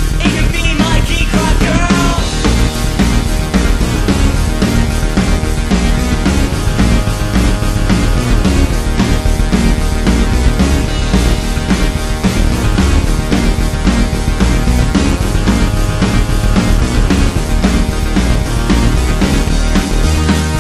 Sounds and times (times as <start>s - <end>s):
Background music: 0.0s - 20.6s
Theme music: 0.0s - 20.6s.